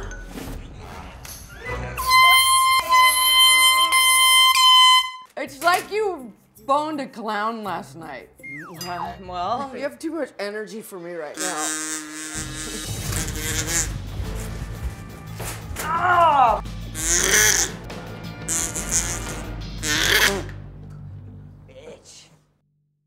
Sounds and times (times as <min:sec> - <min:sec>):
Music: 0:00.0 - 0:22.6.